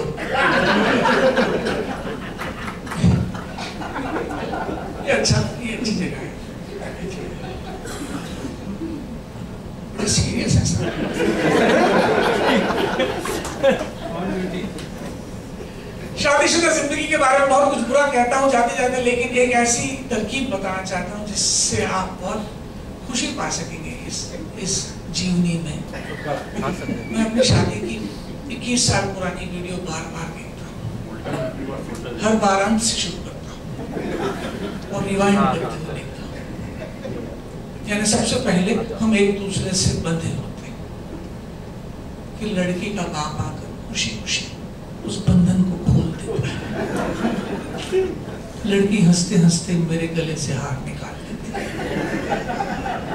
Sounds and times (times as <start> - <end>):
Snicker: 0.2 - 5.0, 10.8 - 14.2, 33.8 - 34.8, 46.4 - 48.4, 51.5 - 53.1
Speech: 5.0 - 7.6, 16.2 - 22.5, 23.1 - 33.6, 37.8 - 40.8, 42.4 - 46.6, 47.8 - 51.6.